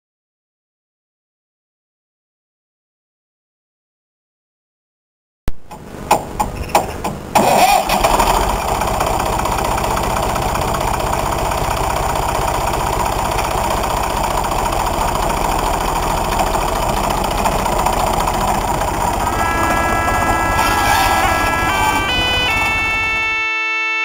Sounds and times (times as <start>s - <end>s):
Vehicle: 5.6s - 24.0s.